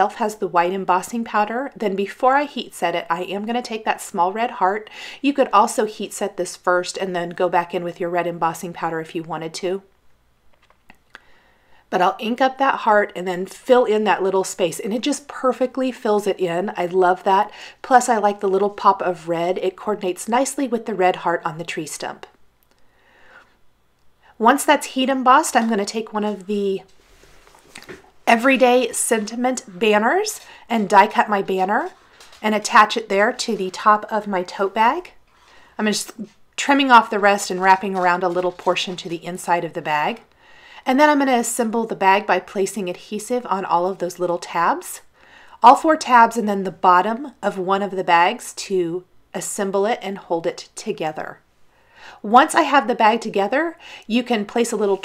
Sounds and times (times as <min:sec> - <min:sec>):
Speech: 0:00.0 - 0:09.9, 0:11.9 - 0:22.3, 0:24.4 - 0:26.9, 0:28.3 - 0:35.2, 0:35.8 - 0:51.4, 0:52.2 - 0:55.0.